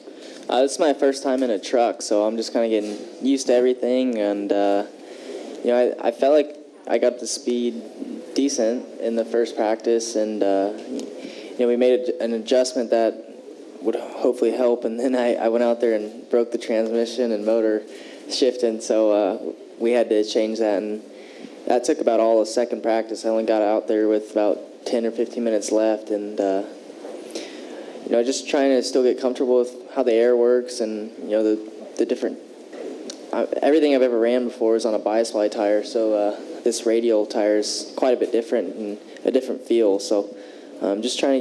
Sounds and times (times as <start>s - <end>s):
Speech: 0.0s - 5.0s, 5.6s - 26.8s, 28.0s - 32.5s, 33.1s - 41.4s.